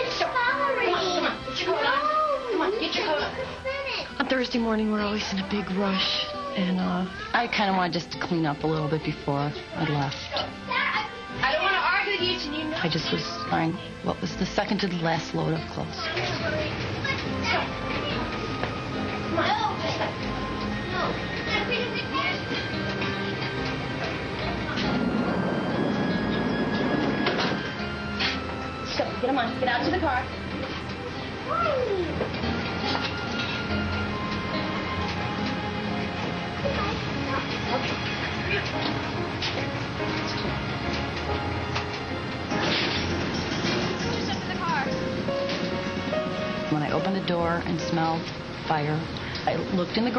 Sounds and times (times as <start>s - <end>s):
Music: 0.0s - 50.1s.